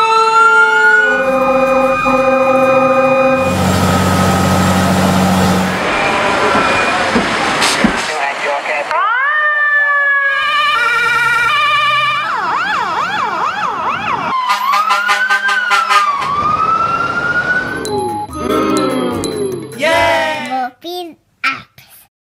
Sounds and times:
Fire engine, fire truck (siren): 0.0s - 7.7s, 8.9s - 18.8s
Speech: 8.0s - 9.0s, 19.8s - 22.0s
Music: 17.8s - 20.5s.

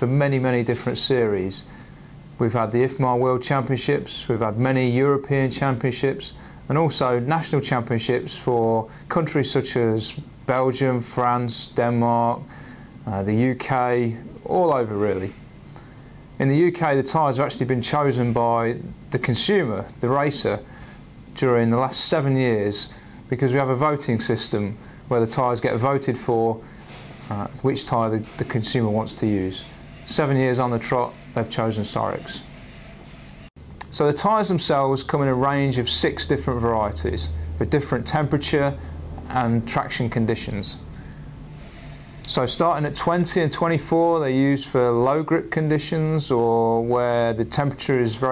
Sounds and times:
Speech: 0.0s - 1.7s, 2.4s - 12.5s, 13.1s - 15.4s, 16.4s - 20.7s, 21.4s - 26.7s, 27.3s - 32.5s, 33.8s - 40.9s, 42.3s - 48.3s.

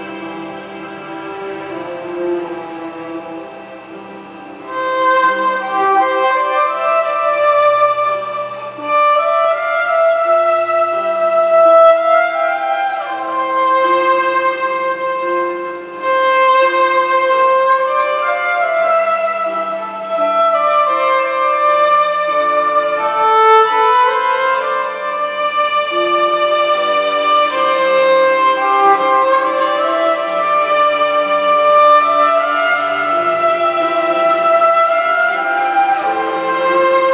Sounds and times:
Violin, fiddle: 0.0s - 37.1s.

